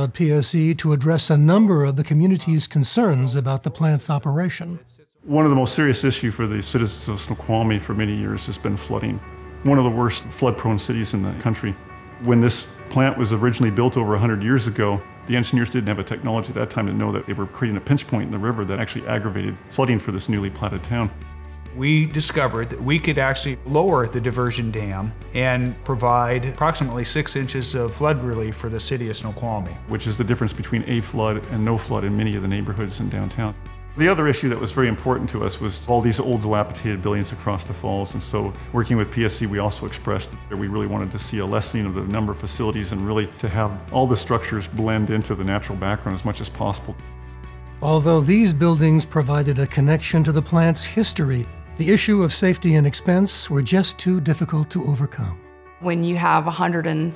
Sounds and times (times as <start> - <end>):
Speech: 0.0 - 47.0, 47.8 - 57.1
Music: 0.0 - 57.1.